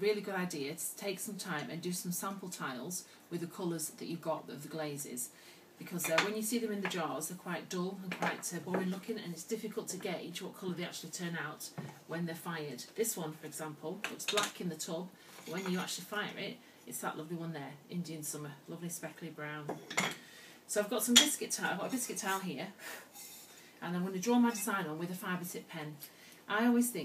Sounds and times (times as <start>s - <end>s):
Speech: 0.0s - 19.8s, 20.7s - 22.8s, 23.8s - 27.0s.